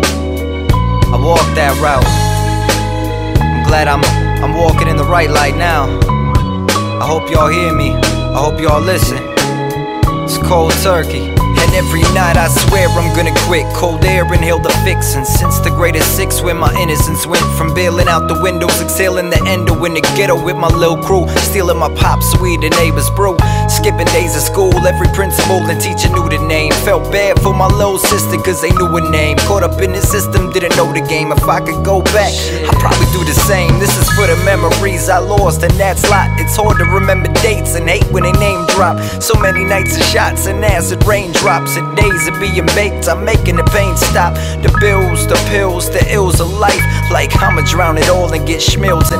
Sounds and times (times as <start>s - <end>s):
Music: 0.0s - 49.1s.